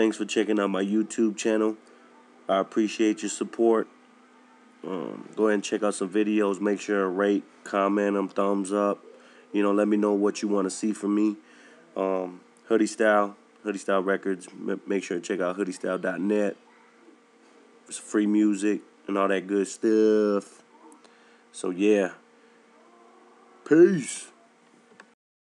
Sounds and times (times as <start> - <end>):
Speech: 0.0 - 3.9, 4.5 - 11.4, 12.0 - 16.6, 17.9 - 20.6, 21.6 - 22.2, 23.7 - 24.4.